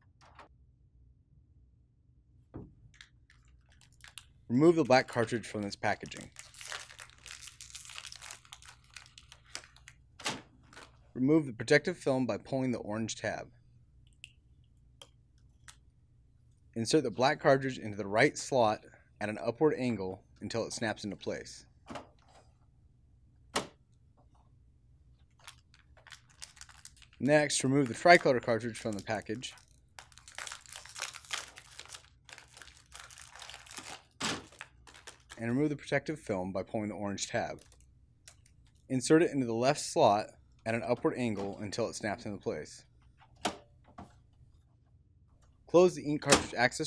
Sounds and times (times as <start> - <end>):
Speech: 4.5 - 6.4, 11.2 - 13.6, 16.8 - 21.7, 27.2 - 29.6, 35.4 - 37.6, 38.9 - 42.9, 45.7 - 46.8.